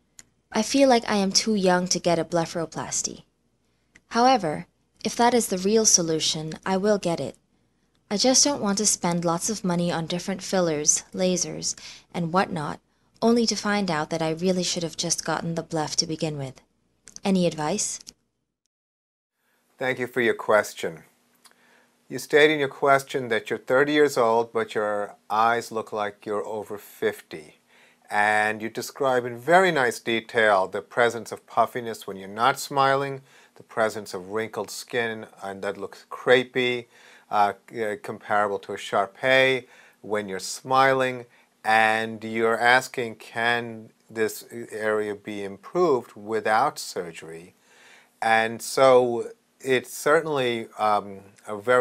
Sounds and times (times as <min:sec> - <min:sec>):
Narration, monologue: 0:00.0 - 0:18.6, 0:19.4 - 0:51.8.